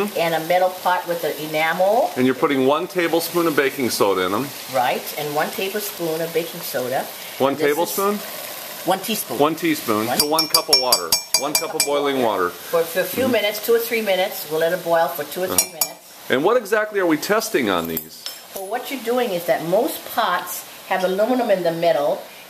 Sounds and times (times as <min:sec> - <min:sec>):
Speech: 0:00.0 - 0:08.2, 0:08.9 - 0:22.2.